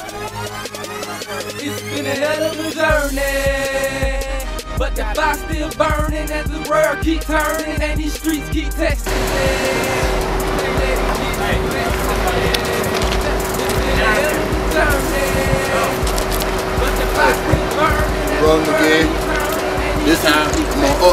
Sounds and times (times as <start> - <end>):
Music: 0.0 - 21.1.